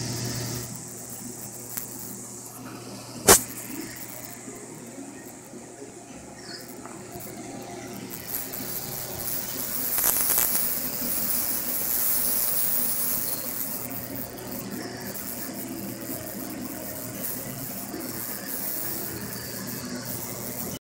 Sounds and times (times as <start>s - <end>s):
Boiling: 0.0s - 20.8s.